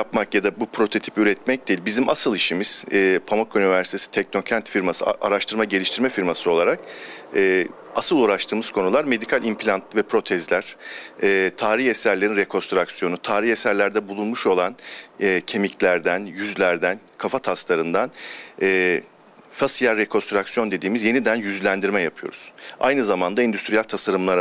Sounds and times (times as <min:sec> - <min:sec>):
Speech: 0:00.0 - 0:24.4.